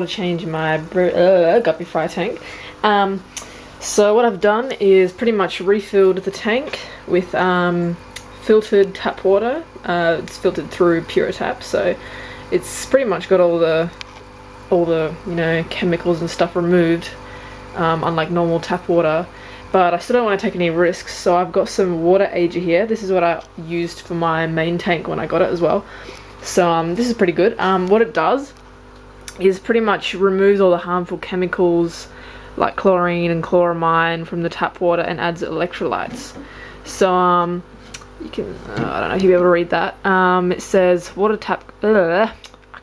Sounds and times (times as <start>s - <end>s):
Speech: 0.0s - 14.0s, 14.7s - 17.2s, 17.8s - 28.6s, 29.3s - 42.8s.